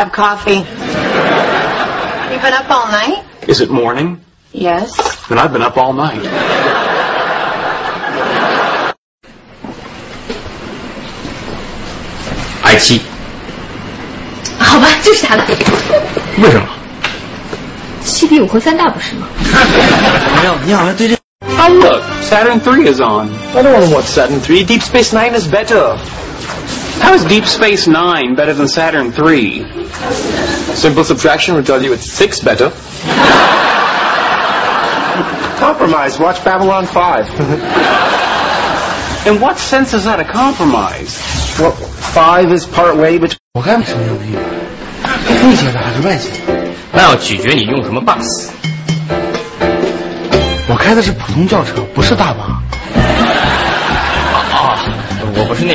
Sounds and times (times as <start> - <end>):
Music: 21.4 - 25.5, 43.6 - 55.7.